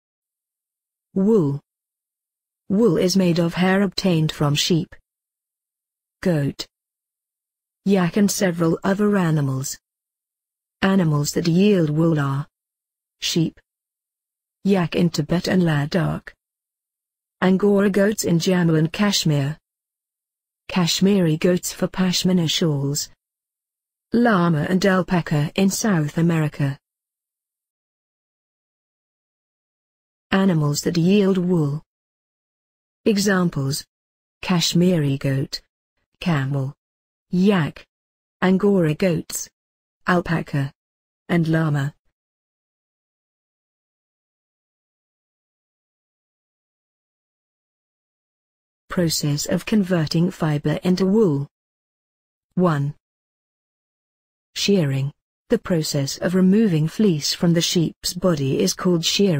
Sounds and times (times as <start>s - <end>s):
Speech: 1.2s - 1.6s, 2.7s - 5.0s, 6.2s - 6.7s, 7.9s - 9.8s, 10.8s - 12.5s, 13.2s - 13.6s, 14.7s - 16.4s, 17.4s - 19.6s, 20.7s - 23.2s, 24.2s - 26.8s, 30.3s - 31.9s, 33.1s - 35.6s, 36.2s - 39.5s, 40.1s - 42.0s, 48.9s - 51.5s, 52.6s - 53.0s, 54.6s - 59.3s.